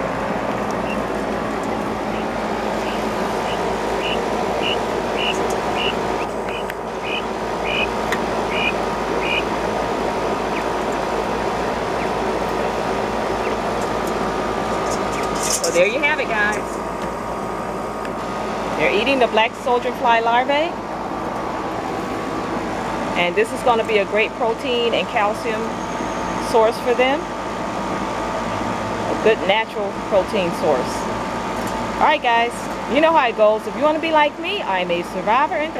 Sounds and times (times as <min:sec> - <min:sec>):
Speech: 0:15.6 - 0:16.6, 0:18.8 - 0:20.8, 0:23.2 - 0:25.7, 0:26.4 - 0:27.2, 0:29.2 - 0:31.1, 0:32.0 - 0:35.7.